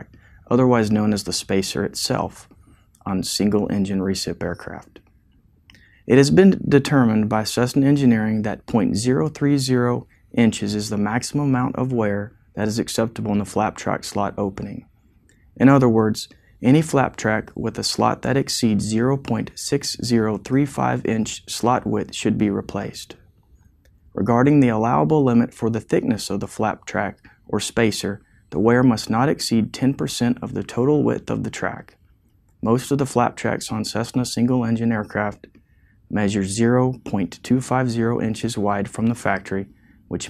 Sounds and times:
Speech: 0.0s - 5.1s, 6.0s - 14.9s, 15.6s - 23.2s, 24.2s - 32.0s, 32.6s - 35.5s, 36.1s - 40.3s.

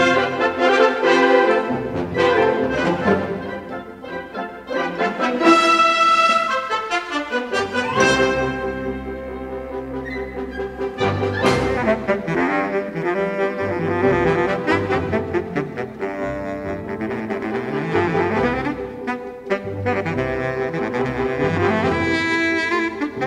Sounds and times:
Music: 0.0s - 23.2s.

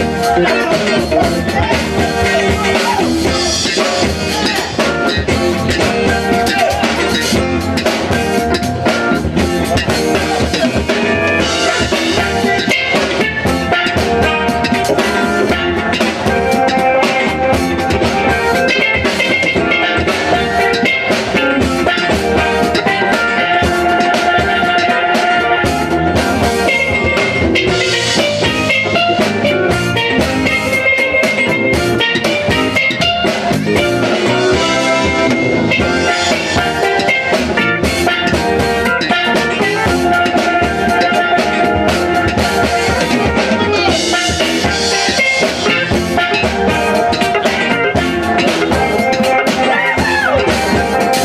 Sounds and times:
Bass drum: 0.0s - 51.2s
Drum kit: 0.0s - 51.2s.

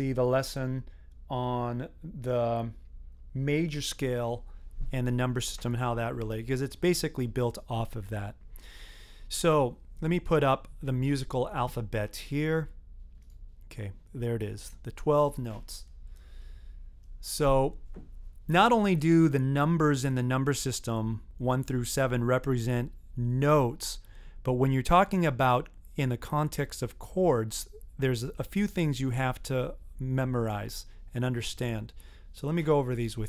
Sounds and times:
Speech: 0.0s - 8.4s, 9.3s - 12.8s, 13.7s - 15.9s, 17.2s - 17.8s, 18.5s - 33.2s.

